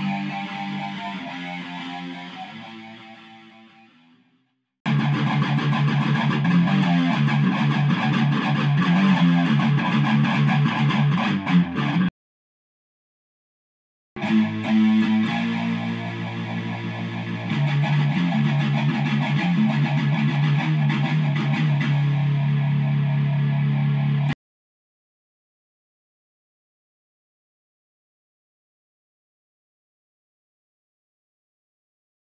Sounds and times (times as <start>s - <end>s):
Electric guitar: 0.0s - 12.1s, 14.2s - 24.4s.